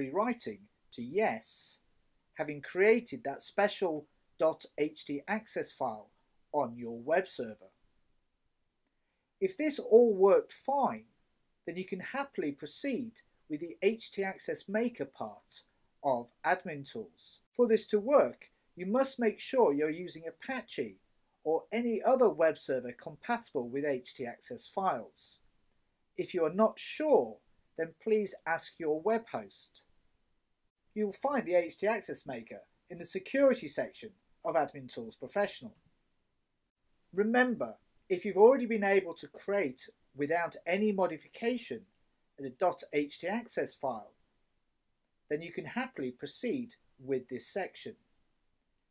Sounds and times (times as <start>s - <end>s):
Speech: 0.0s - 1.8s, 2.4s - 7.7s, 9.4s - 11.0s, 11.7s - 25.4s, 26.2s - 29.8s, 31.0s - 35.7s, 37.2s - 41.8s, 42.4s - 44.2s, 45.3s - 48.0s.